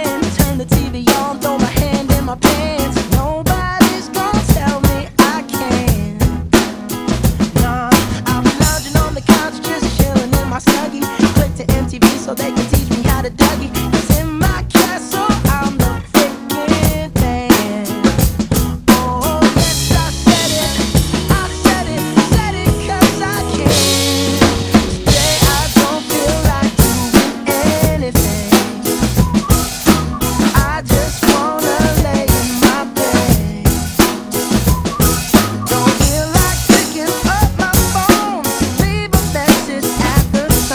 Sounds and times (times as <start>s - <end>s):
Drum kit: 0.0s - 40.7s
Rimshot: 17.6s - 37.3s.